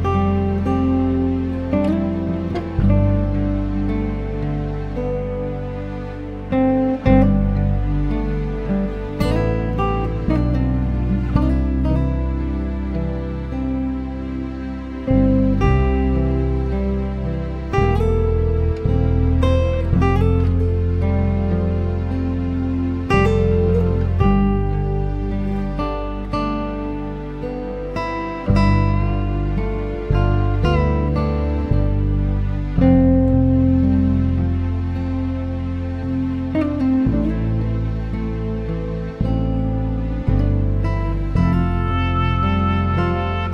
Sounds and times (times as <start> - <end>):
Music: 0.0 - 43.5.